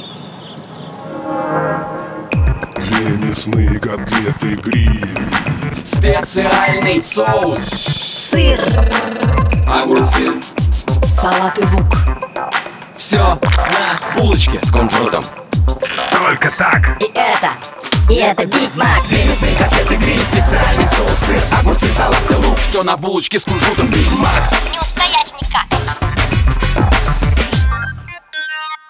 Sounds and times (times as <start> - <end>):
Music: 1.0 - 28.9.